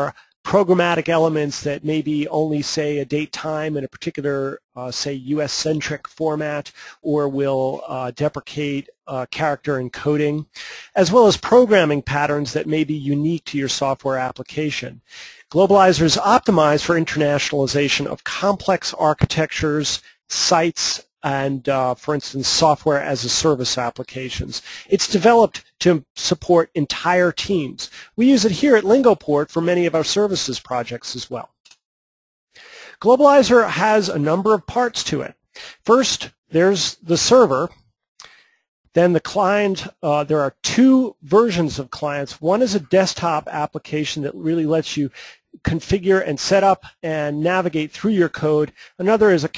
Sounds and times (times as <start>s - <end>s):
Speech: 0.0s - 31.6s, 33.0s - 37.8s, 39.0s - 49.5s.